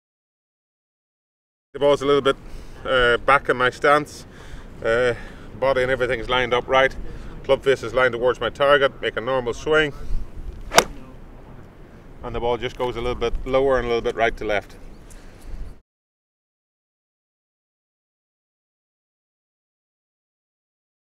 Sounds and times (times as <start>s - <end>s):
Speech: 1.8s - 10.0s, 12.2s - 14.8s.